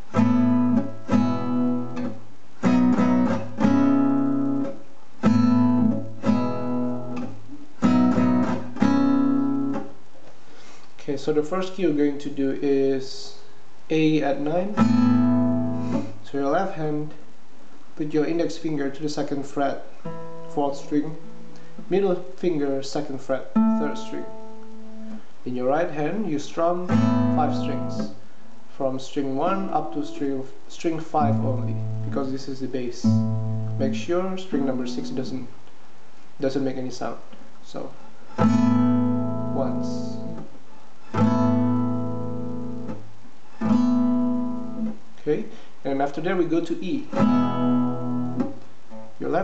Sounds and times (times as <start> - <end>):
Strum: 0.0 - 10.0, 14.0 - 16.6, 19.1 - 25.3, 25.9 - 30.3, 30.9 - 35.4, 38.1 - 45.0, 46.3 - 49.4
Acoustic guitar: 0.0 - 11.6, 13.9 - 36.6, 37.2 - 49.4
Speech: 11.0 - 14.8, 16.2 - 17.2, 18.0 - 21.2, 21.9 - 24.3, 25.4 - 33.2, 33.8 - 35.6, 36.4 - 38.0, 39.5 - 40.3, 45.2 - 47.2, 49.2 - 49.4.